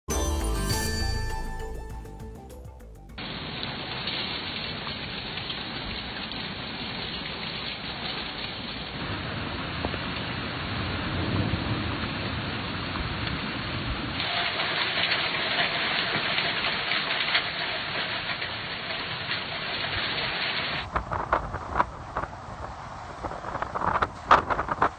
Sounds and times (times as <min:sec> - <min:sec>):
Thunderstorm: 0:09.0 - 0:20.2, 0:20.8 - 0:24.9.